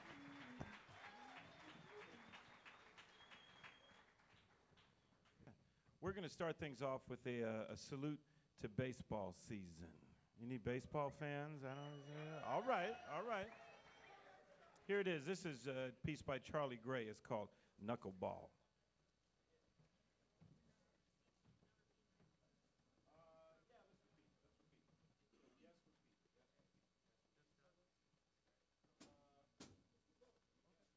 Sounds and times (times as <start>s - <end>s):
Speech: 6.0s - 13.6s, 14.8s - 18.6s, 23.1s - 28.1s, 30.2s - 30.9s.